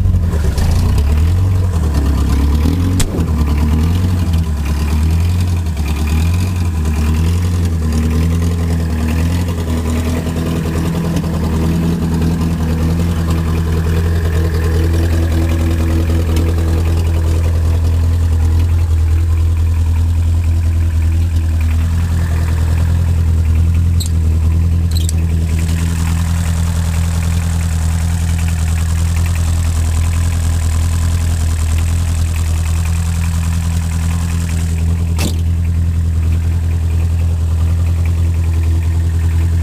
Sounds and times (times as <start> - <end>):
Vehicle: 0.0 - 39.6.